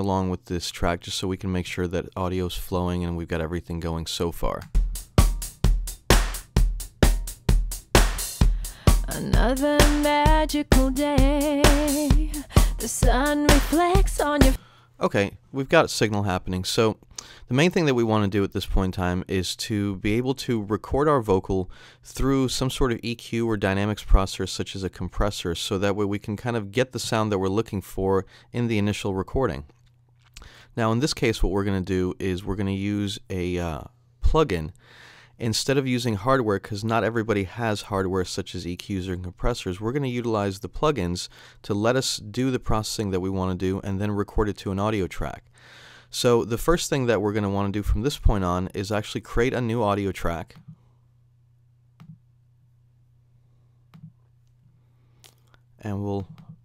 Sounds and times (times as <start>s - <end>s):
Speech: 0.0s - 4.7s, 9.1s - 9.6s, 15.0s - 29.7s, 30.8s - 34.8s, 35.4s - 45.4s, 46.1s - 50.6s, 55.8s - 56.4s
Music: 4.7s - 14.6s.